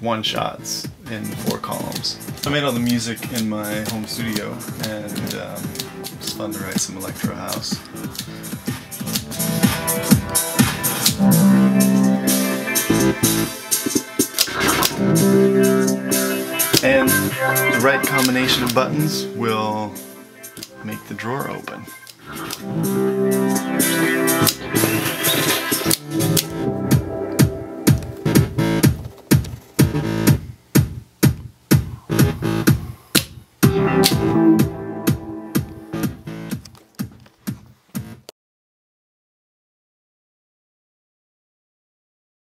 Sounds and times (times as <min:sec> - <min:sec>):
Drum machine: 0:00.4 - 0:21.1, 0:21.8 - 0:38.3.